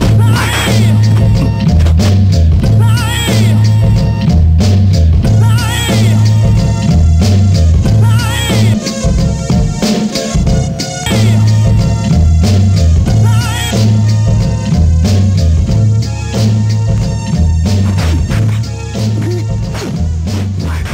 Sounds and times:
Music: 0:00.0 - 0:20.9
Scratch: 0:00.3 - 0:02.2, 0:17.7 - 0:20.9.

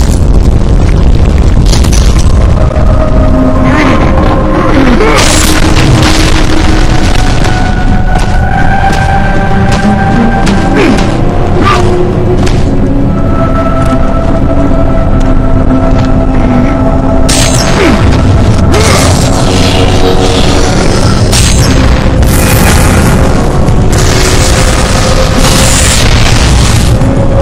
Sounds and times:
Music: 0:00.0 - 0:27.4.

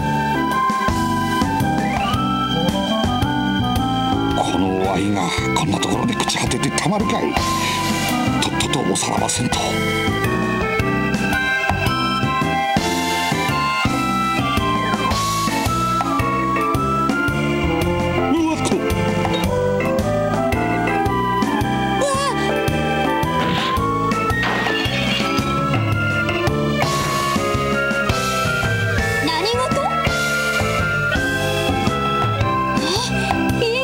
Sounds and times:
Music: 0:00.0 - 0:33.8.

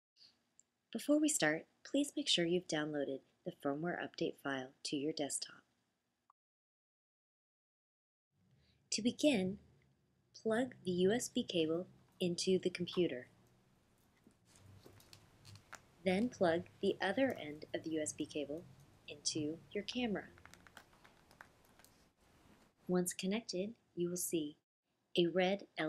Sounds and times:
Speech: 0:01.0 - 0:05.6, 0:09.0 - 0:09.6, 0:10.4 - 0:13.3, 0:16.0 - 0:20.3, 0:22.9 - 0:24.6, 0:25.2 - 0:25.8.

